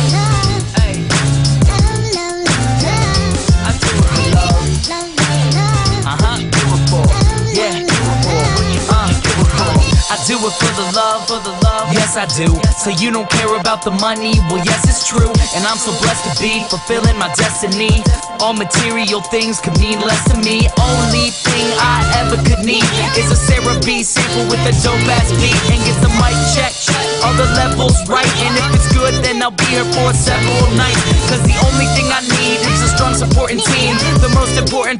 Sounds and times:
Dubstep: 0.0 - 34.9.

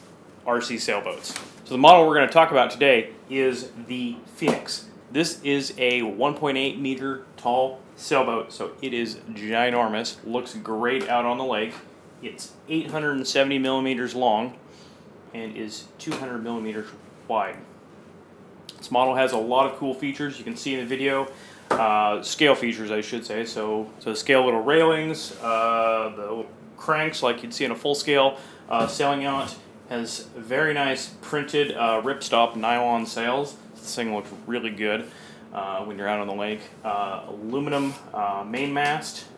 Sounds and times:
Speech: 0.4 - 14.6, 15.3 - 17.7, 18.7 - 39.3.

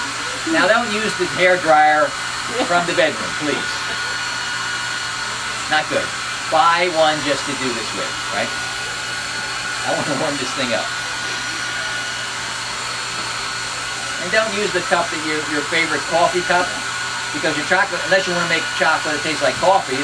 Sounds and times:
Hair dryer: 0.0 - 20.0.

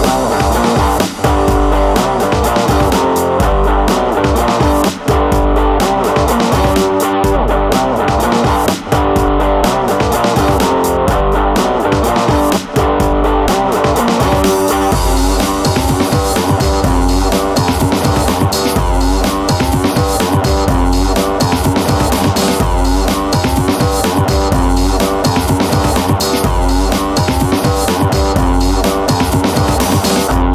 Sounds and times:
Music: 0.0 - 30.5.

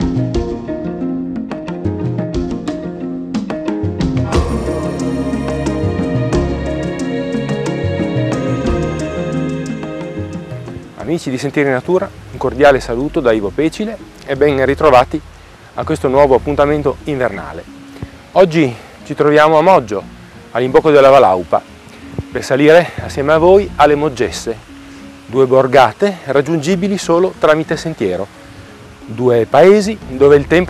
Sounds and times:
Music: 0.0 - 30.7
Speech: 11.0 - 15.2, 15.8 - 17.6, 18.4 - 20.0, 20.6 - 21.6, 22.3 - 24.6, 25.3 - 28.3, 29.1 - 30.7.

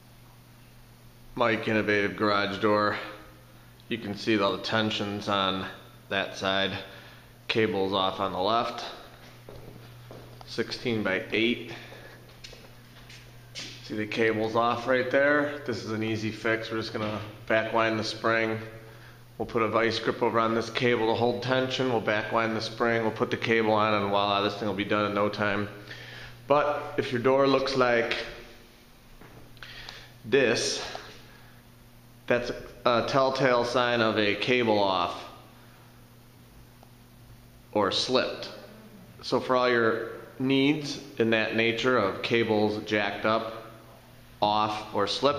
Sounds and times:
Speech: 1.4 - 3.3, 3.9 - 6.9, 7.5 - 9.1, 10.5 - 11.9, 13.8 - 18.8, 19.4 - 25.8, 26.5 - 28.4, 30.3 - 31.1, 32.3 - 35.4, 37.7 - 43.8, 44.4 - 45.3.

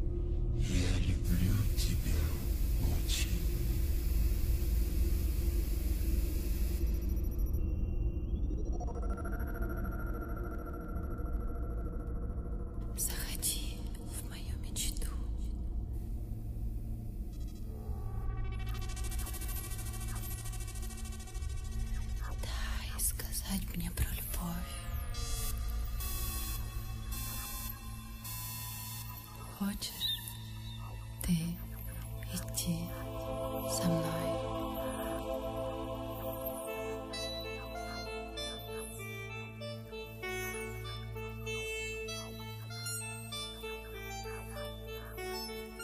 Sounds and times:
Music: 0.0 - 45.8
Speech: 0.6 - 3.6, 31.2 - 34.6.

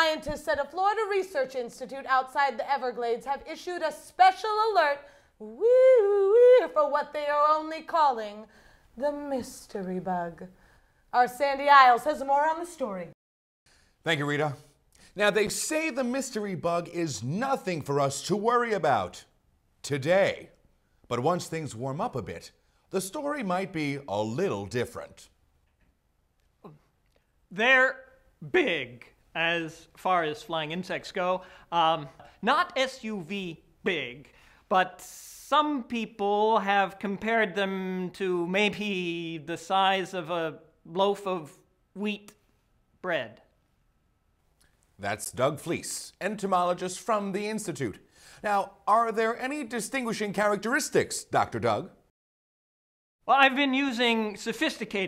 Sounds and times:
Speech: 14.1 - 20.5, 45.0 - 52.0, 53.3 - 55.0.

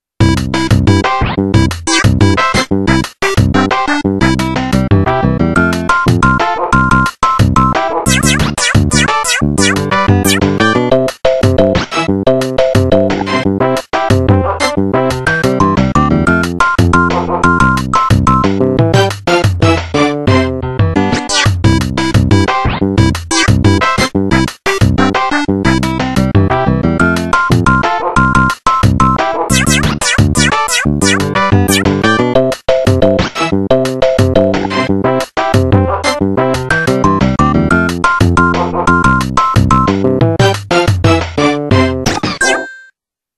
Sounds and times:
Music: 0.2 - 42.6.

